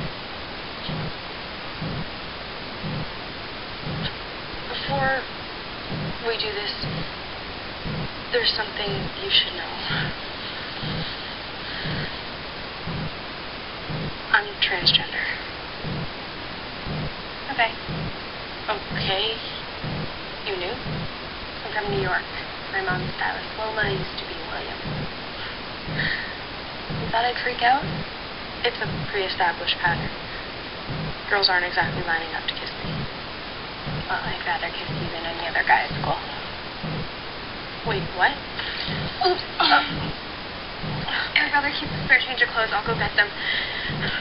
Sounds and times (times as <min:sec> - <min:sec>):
Speech: 0:04.7 - 0:05.3, 0:06.2 - 0:07.0, 0:08.3 - 0:10.2, 0:14.3 - 0:15.4, 0:17.5 - 0:17.8, 0:18.7 - 0:19.6, 0:20.5 - 0:20.8, 0:21.6 - 0:24.8, 0:27.1 - 0:27.8, 0:28.6 - 0:30.2, 0:31.3 - 0:33.1, 0:34.1 - 0:36.5, 0:37.8 - 0:40.2, 0:41.1 - 0:44.2.